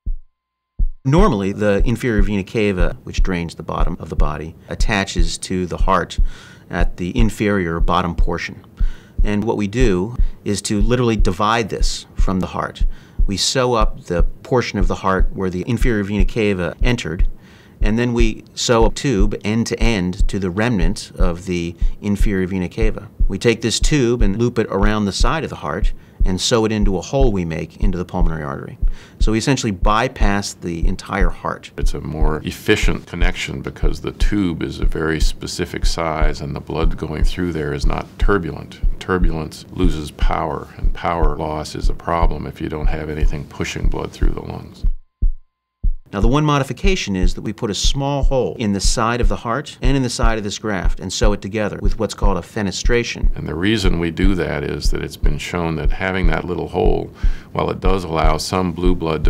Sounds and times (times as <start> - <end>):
Speech: 1.1 - 44.9, 46.1 - 59.3.